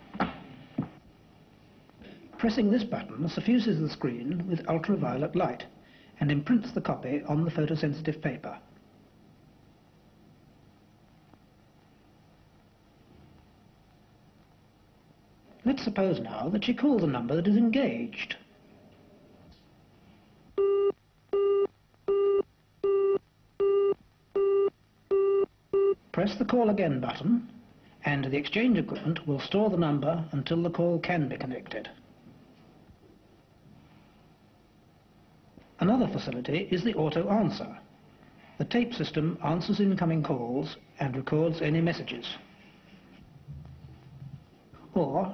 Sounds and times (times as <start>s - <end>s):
Speech: 2.3s - 8.7s, 15.6s - 18.5s, 26.1s - 32.0s, 35.8s - 37.9s, 38.6s - 42.5s, 44.8s - 45.3s.